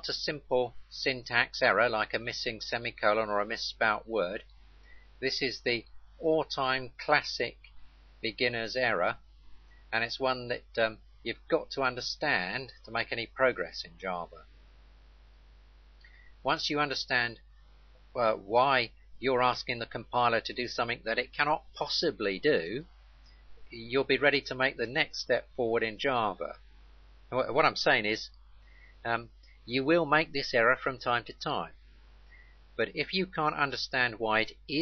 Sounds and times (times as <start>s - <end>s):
Speech: 0.0s - 4.4s, 5.2s - 7.6s, 8.3s - 9.2s, 10.0s - 14.4s, 16.5s - 17.4s, 18.2s - 22.9s, 23.7s - 26.6s, 27.4s - 28.3s, 29.1s - 31.8s, 32.8s - 34.8s.